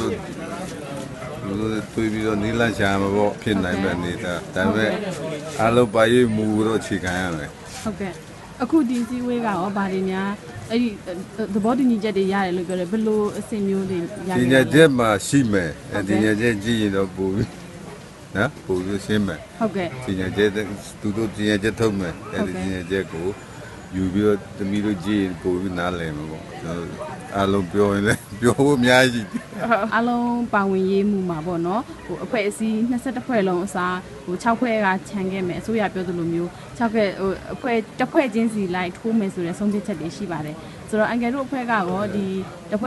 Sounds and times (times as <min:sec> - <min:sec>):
Male speech, man speaking: 0:00.0 - 0:07.6, 0:14.3 - 0:17.6, 0:18.3 - 0:29.8
Conversation: 0:00.0 - 0:42.8
Female speech, woman speaking: 0:07.9 - 0:14.7, 0:19.6 - 0:20.0, 0:29.7 - 0:42.8.